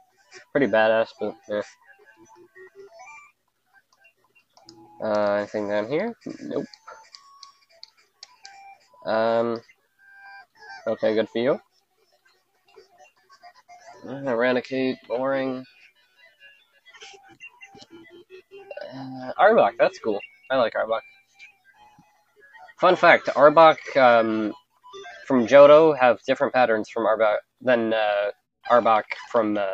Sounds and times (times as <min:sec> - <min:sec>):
Speech: 0:00.6 - 0:01.8, 0:05.0 - 0:06.7, 0:09.1 - 0:09.6, 0:10.8 - 0:11.6, 0:14.0 - 0:15.7, 0:18.7 - 0:21.0, 0:22.7 - 0:29.7.